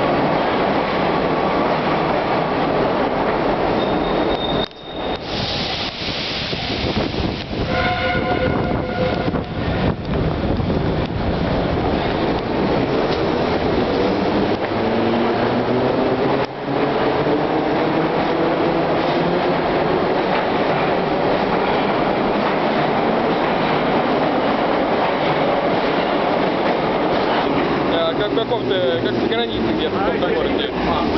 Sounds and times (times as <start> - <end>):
Railroad car, train wagon: 0.0 - 31.1
Subway, metro, underground: 0.0 - 31.1
Train horn: 7.6 - 9.7.